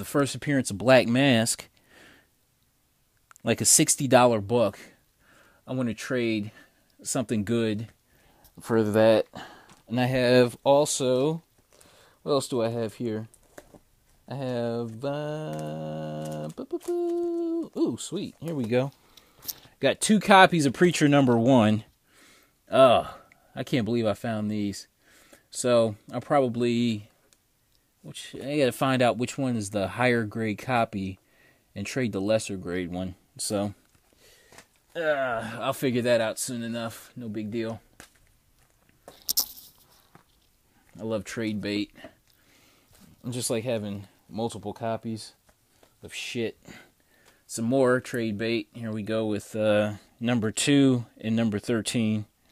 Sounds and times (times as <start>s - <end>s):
Speech: 0.0s - 1.7s, 3.4s - 5.0s, 5.7s - 8.0s, 8.6s - 9.3s, 9.9s - 11.4s, 12.2s - 13.3s, 14.3s - 19.0s, 19.8s - 21.9s, 22.7s - 24.9s, 25.5s - 27.1s, 28.1s - 31.2s, 31.8s - 33.8s, 35.0s - 37.8s, 41.0s - 42.0s, 43.2s - 45.4s, 46.0s - 46.6s, 47.5s - 52.3s
Inside, small room: 0.0s - 52.5s.